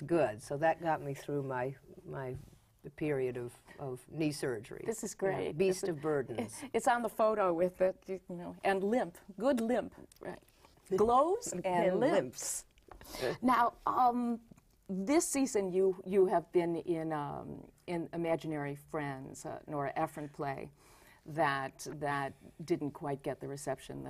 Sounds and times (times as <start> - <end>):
Female speech, woman speaking: 0.0 - 12.7, 13.3 - 20.7, 21.3 - 24.0.